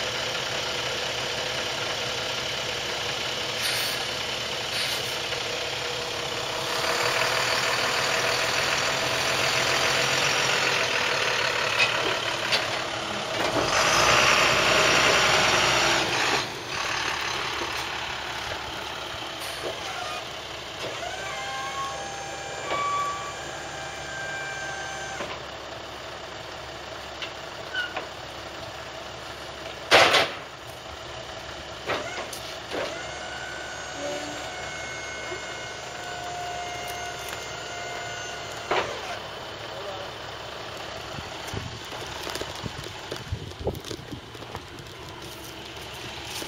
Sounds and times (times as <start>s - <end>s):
Truck: 0.0s - 46.4s.